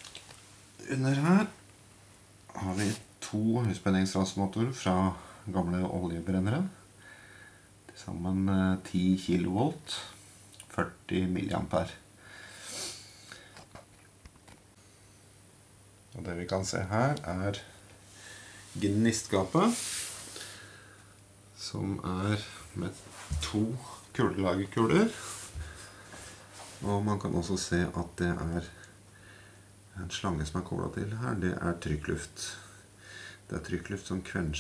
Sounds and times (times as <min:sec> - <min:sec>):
Speech: 0:00.8 - 0:01.6, 0:02.5 - 0:06.8, 0:07.9 - 0:12.0, 0:16.1 - 0:17.8, 0:18.8 - 0:20.0, 0:21.6 - 0:25.3, 0:26.8 - 0:28.8, 0:30.0 - 0:32.7, 0:33.5 - 0:34.6.